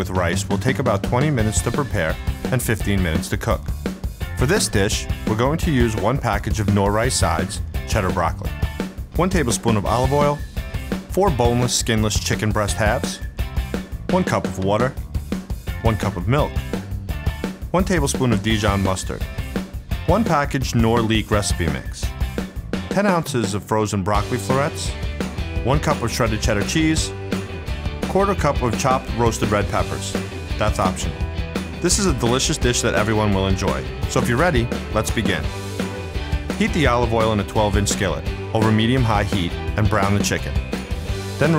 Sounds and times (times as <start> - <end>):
Speech: 0.0 - 3.7, 4.4 - 8.6, 9.2 - 10.4, 11.1 - 13.2, 14.1 - 15.0, 15.8 - 16.6, 17.7 - 19.2, 20.1 - 22.1, 22.9 - 25.0, 25.6 - 27.1, 28.0 - 31.2, 31.8 - 35.5, 36.6 - 40.6
Music: 0.0 - 41.5.